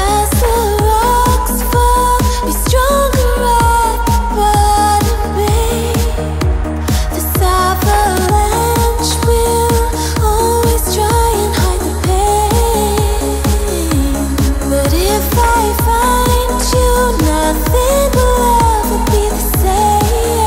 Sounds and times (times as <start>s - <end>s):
Music: 0.0s - 20.4s.